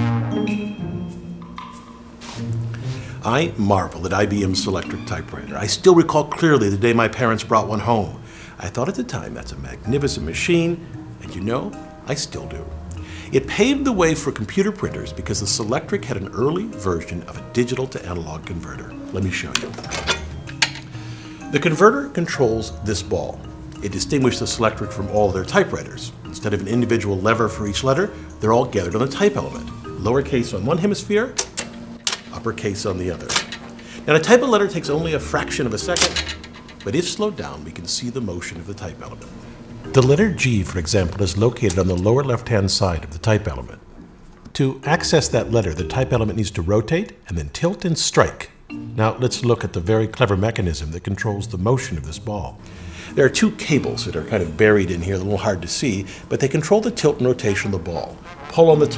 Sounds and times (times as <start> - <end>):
Music: 0.0 - 58.9
Speech: 3.2 - 12.7, 13.3 - 20.0, 21.5 - 31.4, 32.3 - 33.5, 34.1 - 39.3, 39.9 - 43.8, 44.5 - 58.9.